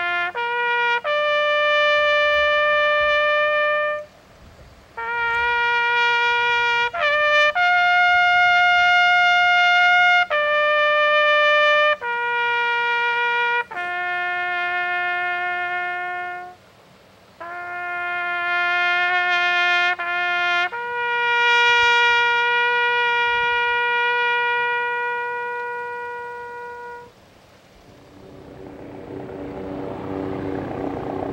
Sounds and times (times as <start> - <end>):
Trumpet: 0.0 - 4.2, 4.9 - 16.6, 17.4 - 27.2
Outside, urban or manmade: 0.0 - 31.3.